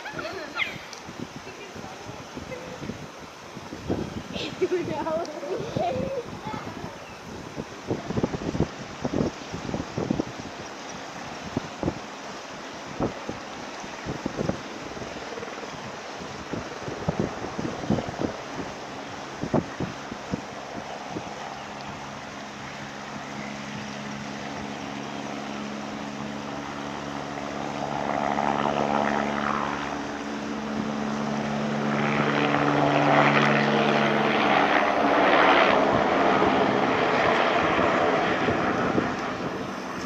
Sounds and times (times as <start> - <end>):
Wind noise (microphone): 0.0 - 24.9, 26.1 - 40.0.